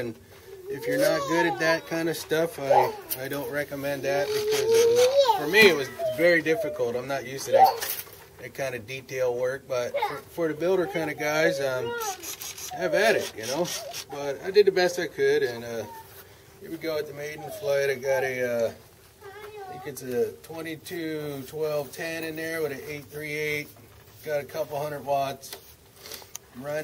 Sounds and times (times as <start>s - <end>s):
Speech: 0.0s - 7.8s
Outside, urban or manmade: 0.0s - 26.8s.